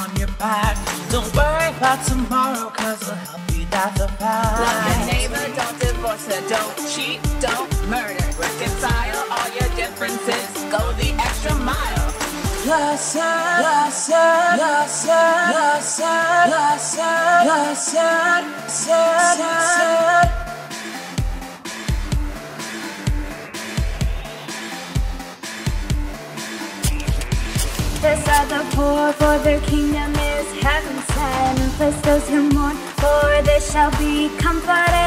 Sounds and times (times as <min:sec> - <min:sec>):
Music: 0:00.0 - 0:35.0.